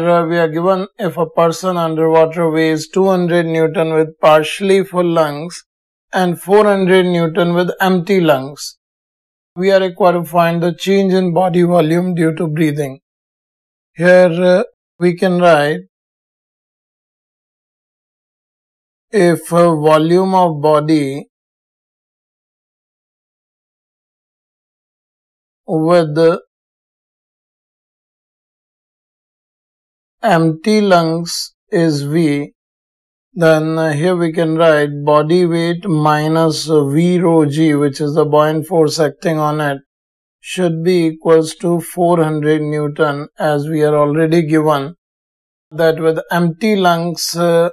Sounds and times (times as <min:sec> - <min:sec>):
Speech: 0:00.0 - 0:08.8, 0:09.6 - 0:13.0, 0:14.0 - 0:15.9, 0:19.2 - 0:21.3, 0:25.7 - 0:26.5, 0:30.2 - 0:32.5, 0:33.4 - 0:45.0, 0:45.8 - 0:47.7.